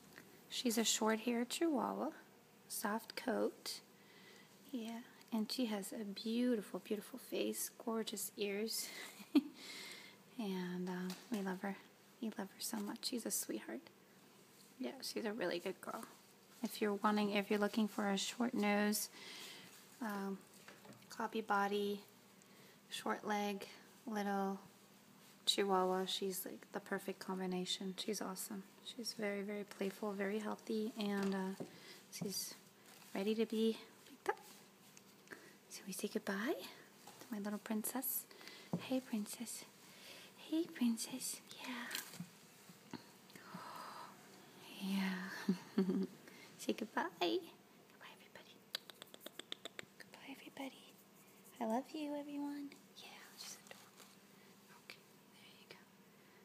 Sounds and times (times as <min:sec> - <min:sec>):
Speech: 0:00.5 - 0:03.9, 0:04.7 - 0:09.0, 0:10.4 - 0:13.9, 0:14.8 - 0:19.1, 0:20.0 - 0:20.4, 0:21.1 - 0:22.1, 0:22.9 - 0:24.7, 0:25.4 - 0:34.6, 0:35.7 - 0:39.7, 0:40.4 - 0:42.0, 0:46.6 - 0:47.6, 0:50.1 - 0:53.6
Whispering: 0:40.4 - 0:42.1, 0:47.9 - 0:49.4, 0:50.0 - 0:53.9, 0:54.7 - 0:55.9.